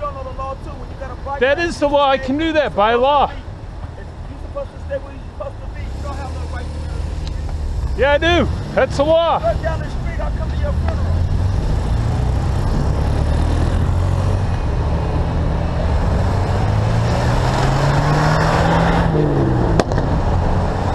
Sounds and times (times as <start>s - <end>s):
Car: 0.0s - 20.9s
Motorcycle: 4.8s - 20.9s.